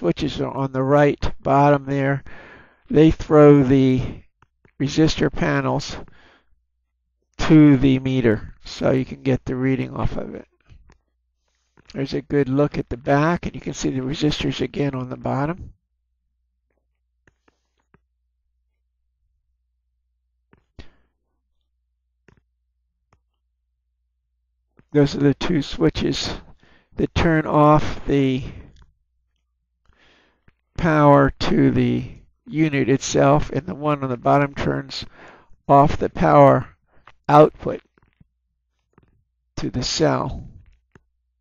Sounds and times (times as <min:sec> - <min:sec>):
Speech: 0:00.0 - 0:02.3, 0:02.9 - 0:04.2, 0:04.8 - 0:06.1, 0:07.4 - 0:10.5, 0:11.9 - 0:15.7, 0:24.9 - 0:28.7, 0:30.8 - 0:35.1, 0:35.7 - 0:37.8, 0:39.6 - 0:40.6
Inside, small room: 0:00.0 - 0:41.4.